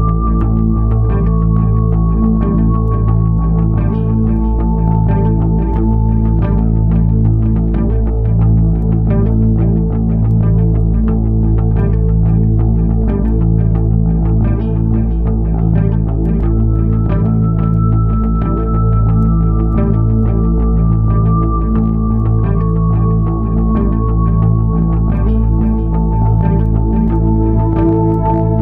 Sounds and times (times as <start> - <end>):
Music: 0.0 - 28.6.